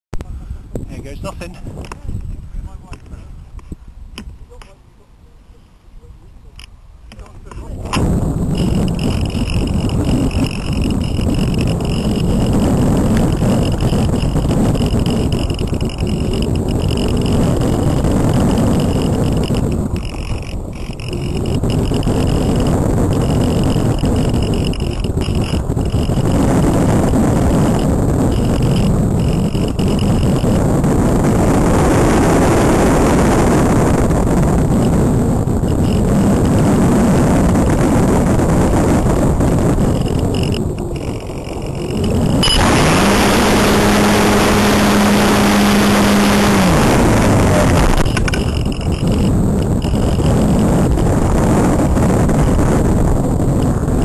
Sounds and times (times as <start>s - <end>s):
Outside, rural or natural: 0.1s - 54.0s
Speech: 0.2s - 3.3s, 7.1s - 8.0s.